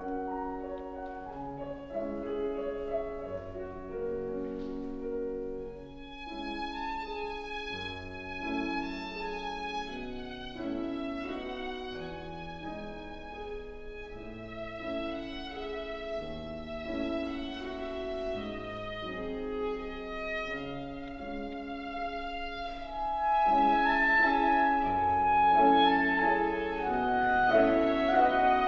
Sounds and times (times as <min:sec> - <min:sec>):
Violin, fiddle: 0:05.7 - 0:28.6.